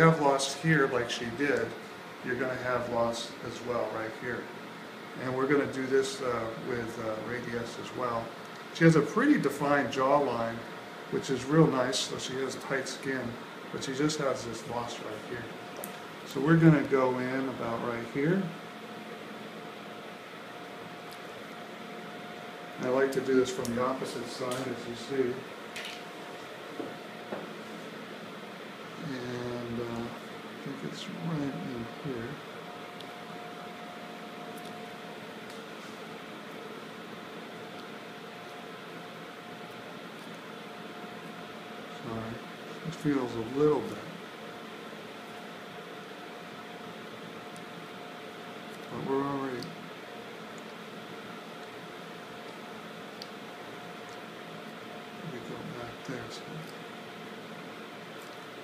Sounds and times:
Speech: 0:00.0 - 0:04.5, 0:05.2 - 0:15.6, 0:16.3 - 0:18.6, 0:22.8 - 0:25.5, 0:29.0 - 0:32.4, 0:41.9 - 0:44.2, 0:48.9 - 0:49.8, 0:55.2 - 0:56.8.

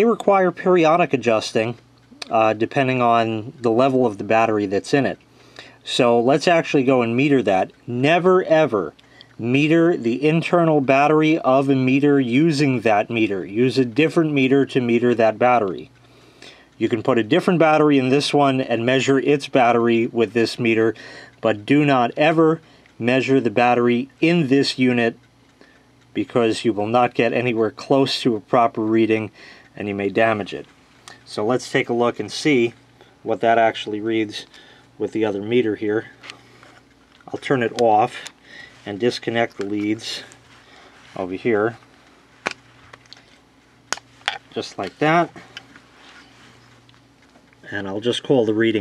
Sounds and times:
Speech: 0:00.0 - 0:05.2, 0:05.8 - 0:15.9, 0:16.8 - 0:25.2, 0:26.2 - 0:36.2, 0:37.3 - 0:40.4, 0:41.2 - 0:41.8, 0:44.5 - 0:45.5, 0:47.7 - 0:48.8.

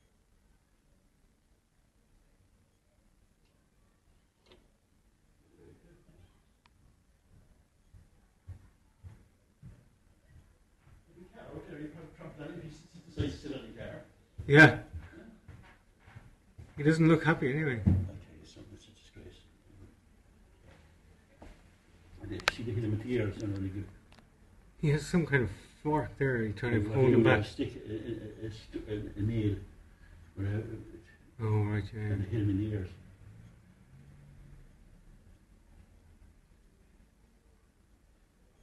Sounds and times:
Speech: 0:11.1 - 0:15.3, 0:16.8 - 0:19.6, 0:22.2 - 0:24.0, 0:24.8 - 0:29.7, 0:30.4 - 0:33.0.

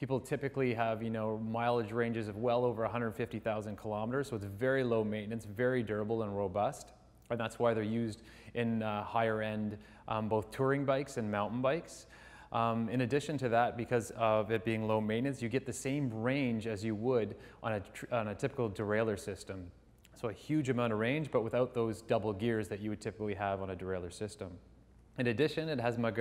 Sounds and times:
Speech: 0:00.0 - 0:24.6, 0:25.2 - 0:26.2.

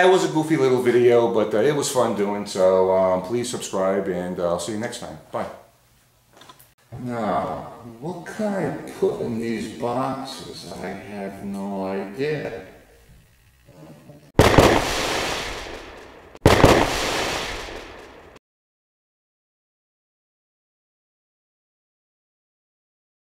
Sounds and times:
Speech: 0:00.0 - 0:05.7, 0:07.0 - 0:12.8
Inside, small room: 0:00.0 - 0:14.4
Firecracker: 0:14.4 - 0:18.4.

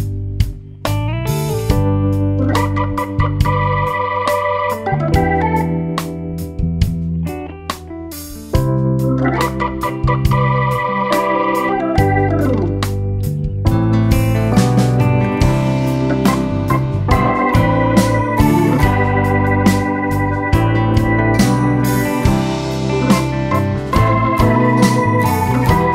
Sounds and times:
Music: 0:00.0 - 0:25.9.

